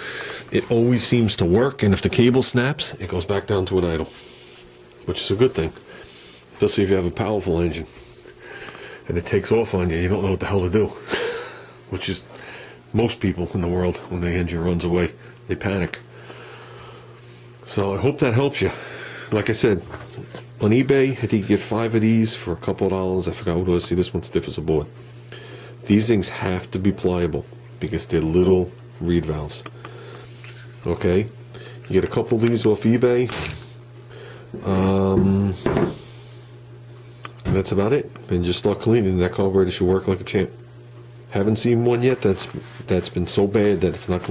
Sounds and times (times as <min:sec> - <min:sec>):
Speech: 0:00.5 - 0:04.2, 0:05.0 - 0:05.8, 0:06.6 - 0:07.9, 0:09.0 - 0:11.0, 0:11.9 - 0:12.3, 0:12.9 - 0:16.0, 0:17.6 - 0:25.0, 0:25.8 - 0:29.7, 0:30.8 - 0:33.5, 0:34.6 - 0:35.8, 0:37.4 - 0:40.6, 0:41.3 - 0:44.3.